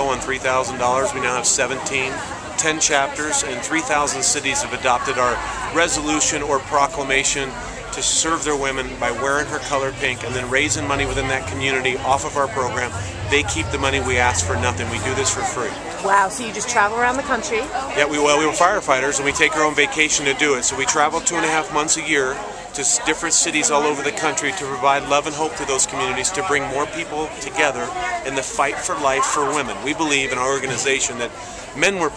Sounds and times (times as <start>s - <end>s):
Speech: 0.0s - 32.1s.